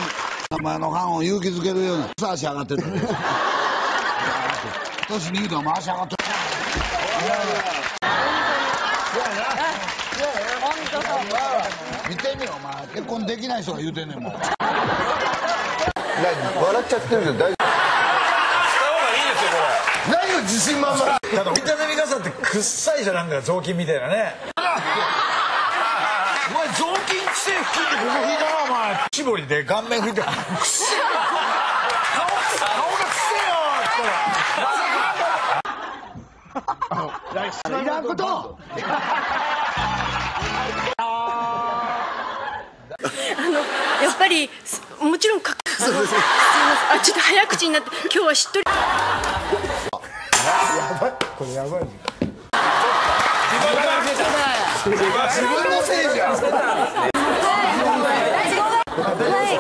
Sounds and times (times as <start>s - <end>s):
Laughter: 2.0s - 10.4s, 14.1s - 21.5s, 24.5s - 29.1s, 29.9s - 37.8s, 38.6s - 44.5s, 45.5s - 51.4s, 52.6s - 59.6s.